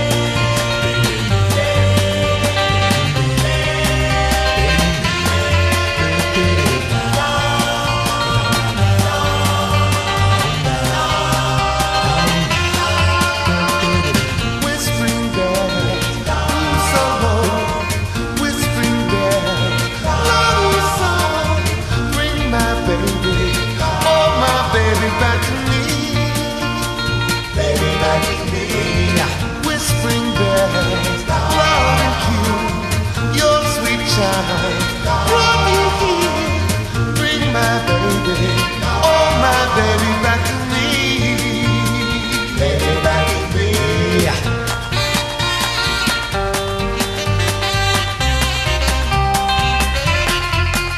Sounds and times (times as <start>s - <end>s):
Music: 0.0s - 50.9s.